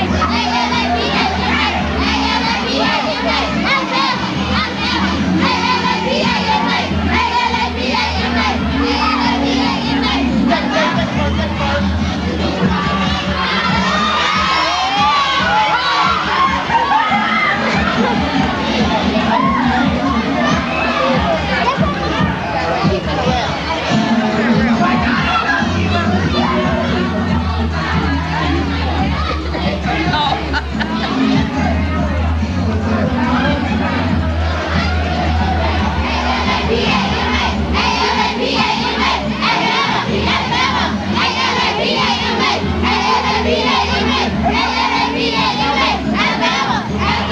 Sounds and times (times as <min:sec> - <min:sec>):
Music: 0:00.0 - 0:47.3.